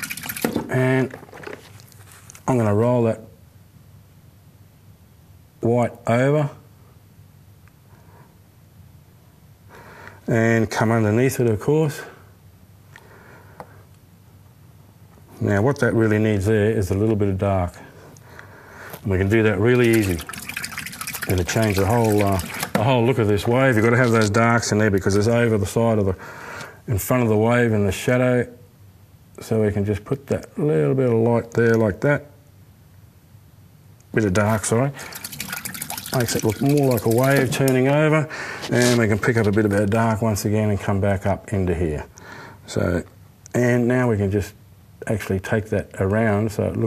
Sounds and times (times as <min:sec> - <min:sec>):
Inside, small room: 0:00.0 - 0:46.8
Speech: 0:00.6 - 0:01.2, 0:02.4 - 0:03.4, 0:05.6 - 0:06.7, 0:10.3 - 0:12.2, 0:15.4 - 0:17.9, 0:19.0 - 0:20.3, 0:21.3 - 0:26.2, 0:26.9 - 0:28.7, 0:29.4 - 0:32.4, 0:34.1 - 0:35.0, 0:36.1 - 0:42.1, 0:42.7 - 0:46.8.